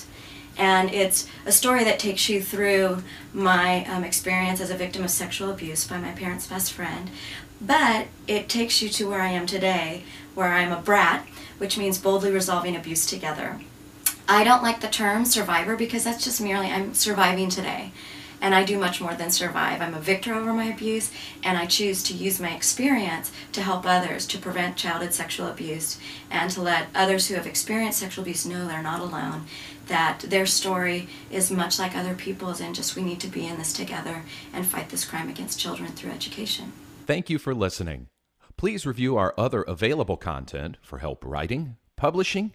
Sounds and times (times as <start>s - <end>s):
Speech: 0.6s - 42.5s.